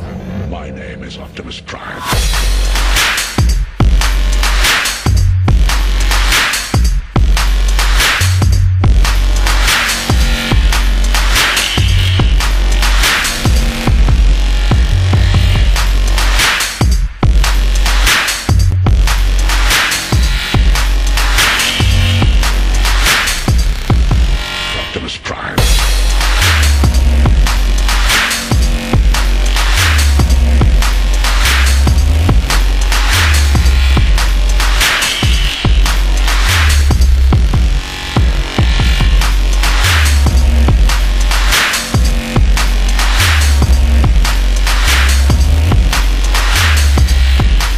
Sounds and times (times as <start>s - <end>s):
Dubstep: 1.1s - 47.7s.